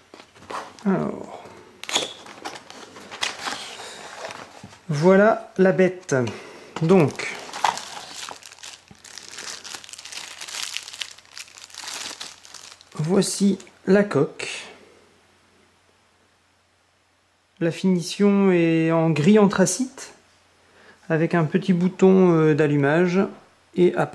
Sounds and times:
Speech: 0:00.8 - 0:01.5, 0:04.9 - 0:07.4, 0:13.0 - 0:14.8, 0:17.6 - 0:20.2, 0:21.1 - 0:24.1.

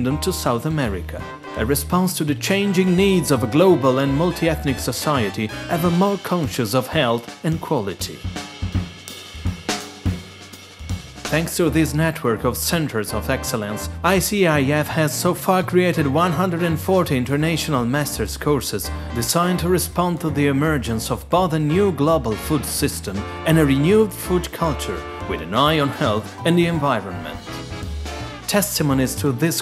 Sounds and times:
Speech: 0:00.0 - 0:08.3, 0:11.3 - 0:27.6, 0:28.5 - 0:29.6.

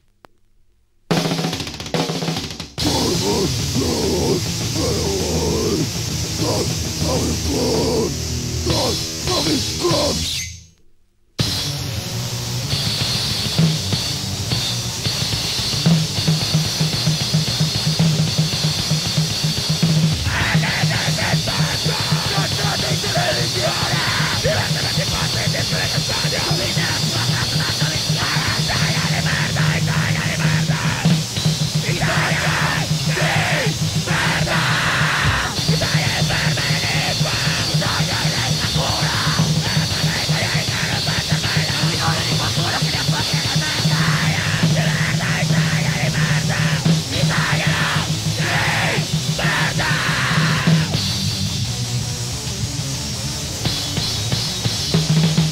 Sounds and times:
Music: 0:01.1 - 0:10.8, 0:11.4 - 0:55.5.

